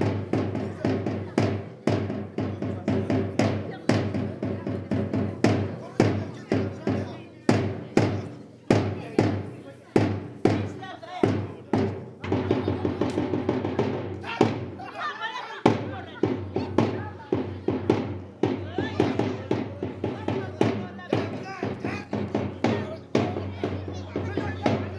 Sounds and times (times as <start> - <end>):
Speech: 0.0 - 13.4, 14.2 - 24.9
Music: 0.0 - 14.8, 15.6 - 24.9.